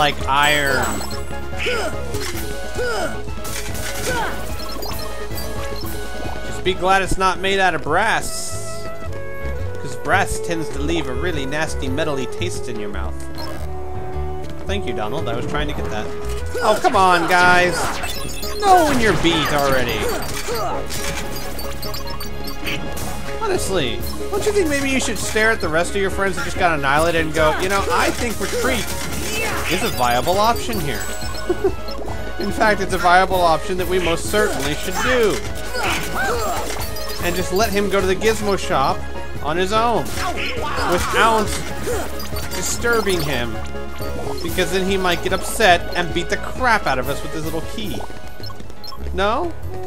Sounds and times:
Music: 0.0 - 49.8
Speech: 32.4 - 35.4, 44.5 - 48.1.

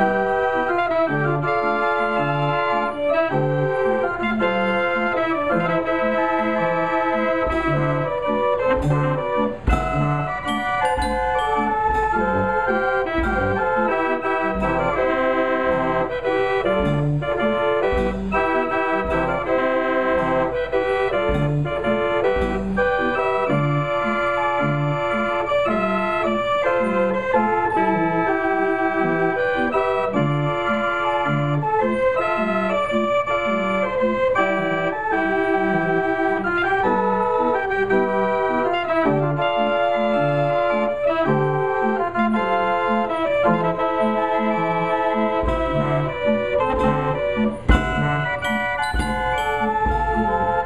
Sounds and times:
Hammond organ: 0.0 - 50.6.

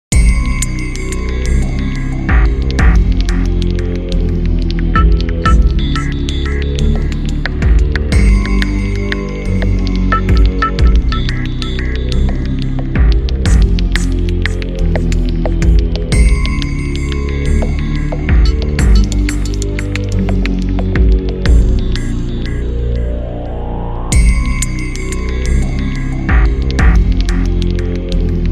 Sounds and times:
Soundtrack music: 0.1 - 28.5.

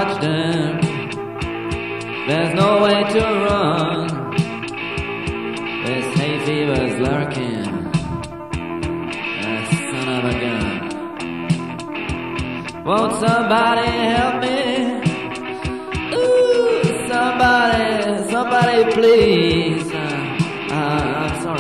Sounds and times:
Music: 0.0 - 21.6.

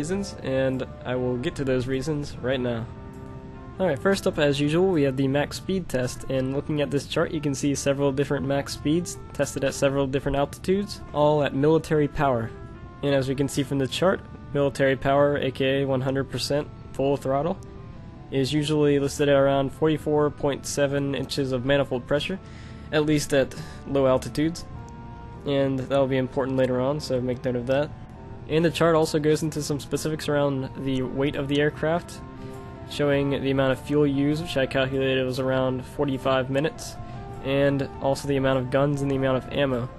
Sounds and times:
Speech: 0.0 - 2.9, 3.8 - 17.6, 18.3 - 24.7, 25.4 - 27.9, 28.5 - 32.2, 32.9 - 39.9
Music: 0.0 - 39.9.

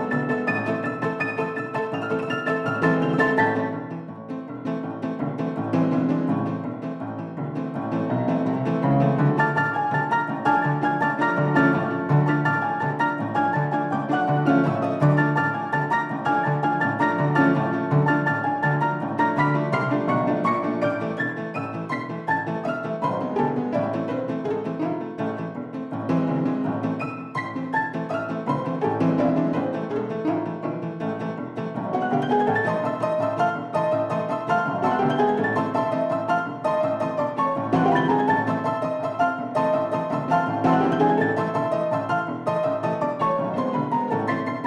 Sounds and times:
Music: 0.0 - 44.6.

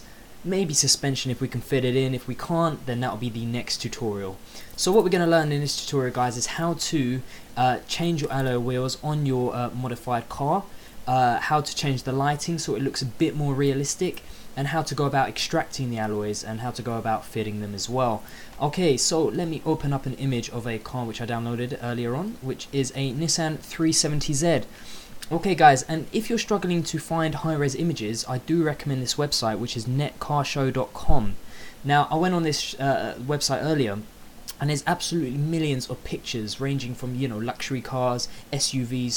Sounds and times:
Speech: 0.4 - 39.1.

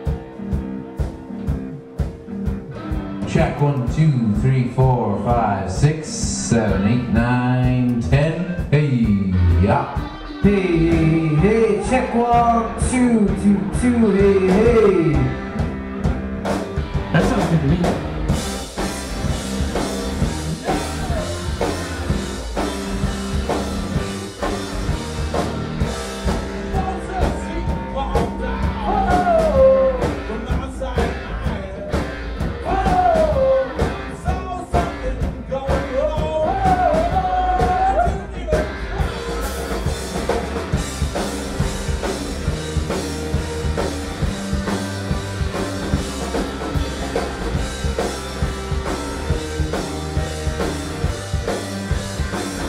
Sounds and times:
Music: 0.0 - 52.6
Speech: 3.2 - 15.4, 17.2 - 17.9.

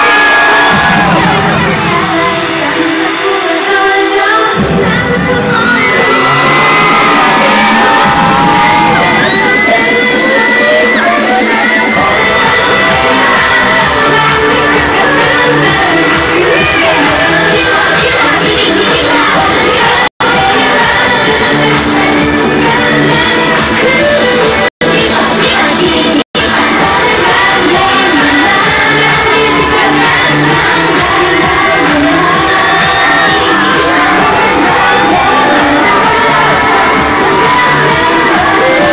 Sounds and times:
Music: 0.0 - 38.9.

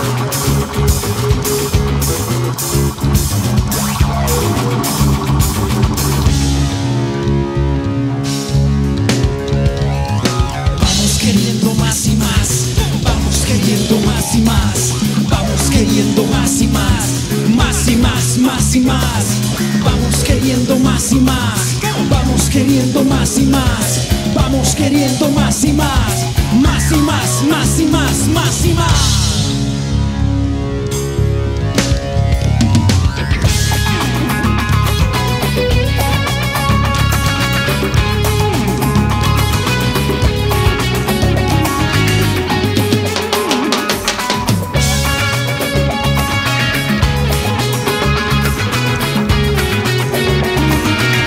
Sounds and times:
Electric guitar: 0.0 - 51.2.

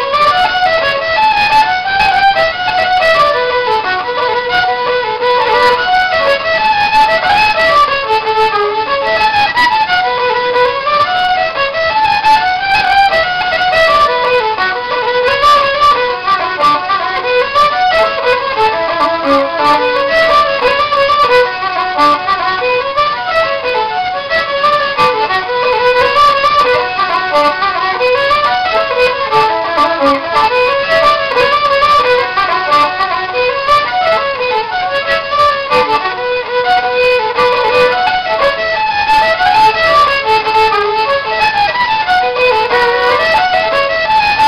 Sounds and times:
Violin, fiddle: 0.0 - 44.4.

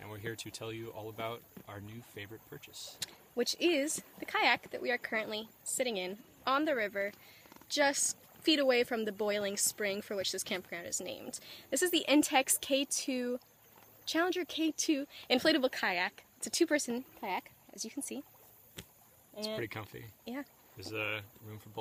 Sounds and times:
Speech: 0.0 - 7.1, 19.4 - 21.8.

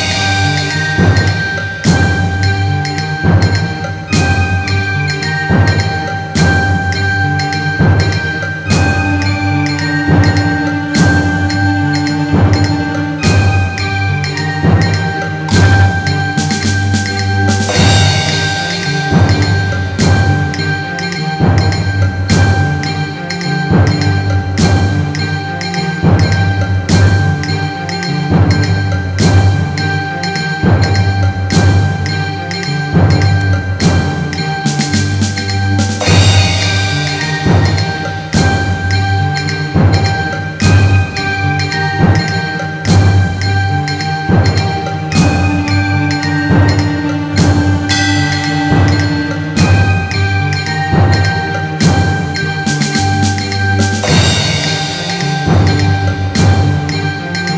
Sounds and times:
Music: 0.0 - 57.5.

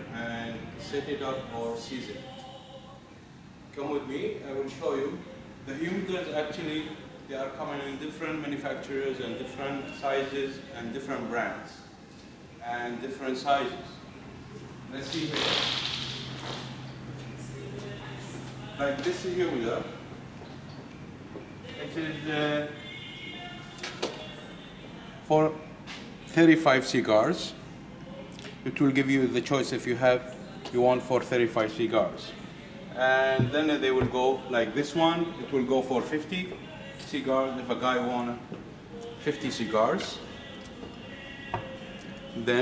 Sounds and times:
Speech: 0.1 - 2.2, 3.8 - 11.9, 12.6 - 14.0, 17.7 - 20.0, 28.6 - 32.4.

